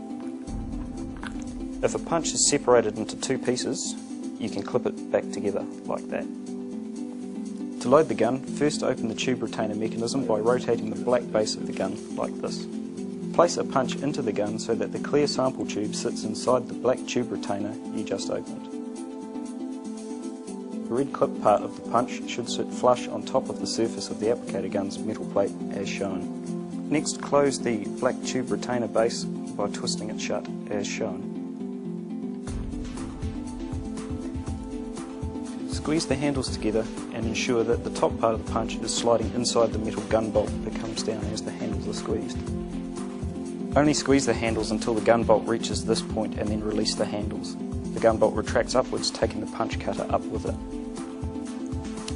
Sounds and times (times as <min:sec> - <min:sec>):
Music: 0:00.0 - 0:52.1
Speech: 0:01.8 - 0:06.3, 0:07.8 - 0:12.7, 0:13.3 - 0:18.7, 0:20.9 - 0:26.3, 0:26.9 - 0:31.3, 0:35.7 - 0:42.5, 0:43.7 - 0:50.6.